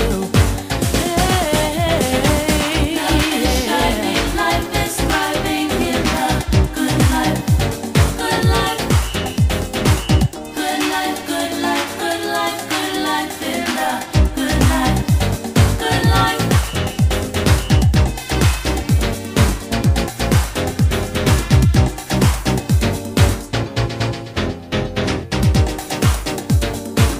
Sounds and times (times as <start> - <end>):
Disco: 0.0 - 27.1
Funk: 13.8 - 23.6.